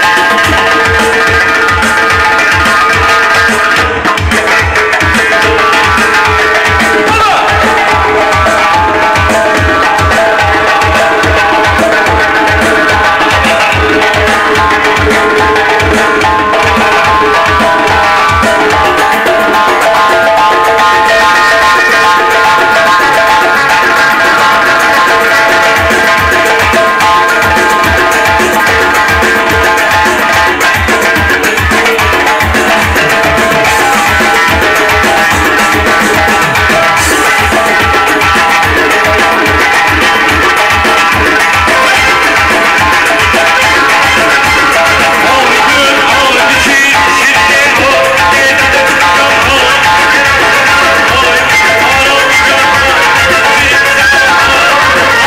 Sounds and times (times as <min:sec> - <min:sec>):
Bass drum: 0:00.0 - 0:55.2
Drum kit: 0:00.0 - 0:55.2.